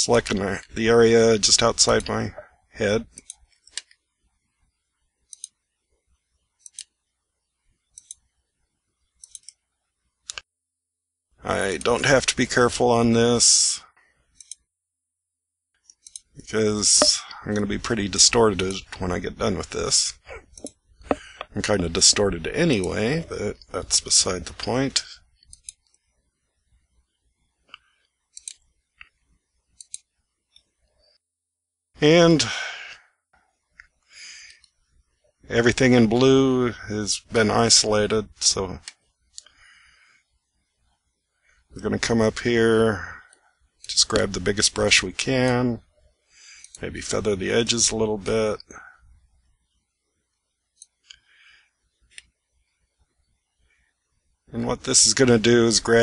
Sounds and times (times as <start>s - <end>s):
Speech: 0.0s - 3.2s, 11.4s - 13.9s, 16.4s - 20.4s, 21.5s - 25.2s, 32.0s - 33.0s, 35.5s - 38.8s, 41.8s - 43.3s, 43.9s - 45.8s, 46.8s - 49.0s, 54.5s - 56.0s
Clicking: 5.3s - 5.6s, 10.3s - 10.5s, 25.4s - 26.0s, 29.8s - 30.7s.